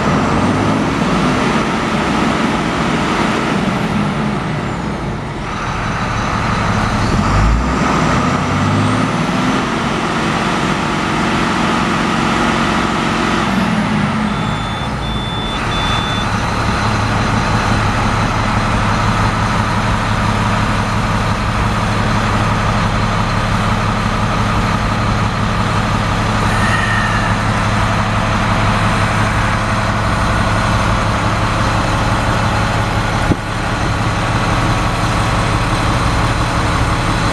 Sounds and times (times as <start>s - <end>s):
Reversing beeps: 14.1s - 17.0s, 26.4s - 28.2s.